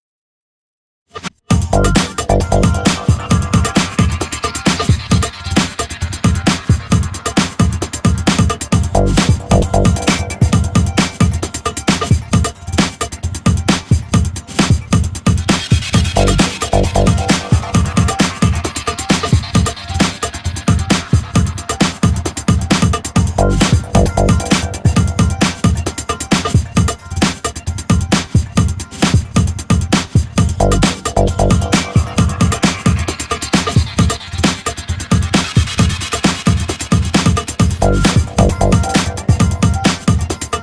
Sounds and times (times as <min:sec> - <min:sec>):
Music: 0:01.1 - 0:40.6.